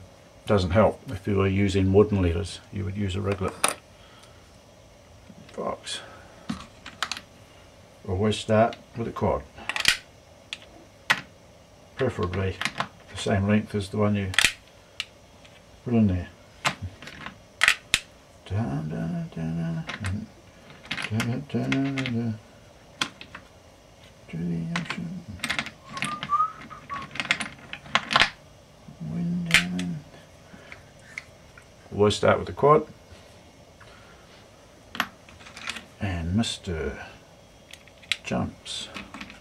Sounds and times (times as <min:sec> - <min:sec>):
Inside, small room: 0:00.0 - 0:39.4
Speech: 0:00.5 - 0:03.7, 0:05.5 - 0:06.1, 0:08.0 - 0:09.5, 0:12.0 - 0:14.4, 0:15.8 - 0:16.4, 0:21.1 - 0:22.4, 0:24.3 - 0:25.4, 0:31.9 - 0:33.0, 0:36.0 - 0:37.2, 0:38.2 - 0:39.0.